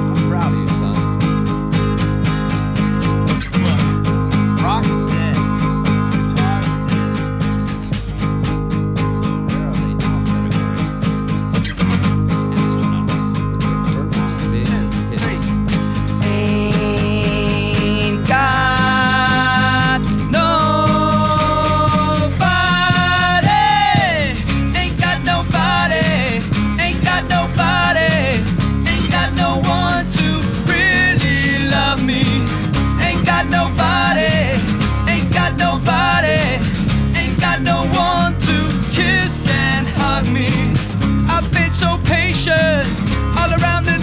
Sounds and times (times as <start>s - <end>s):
Music: 0.0s - 44.0s.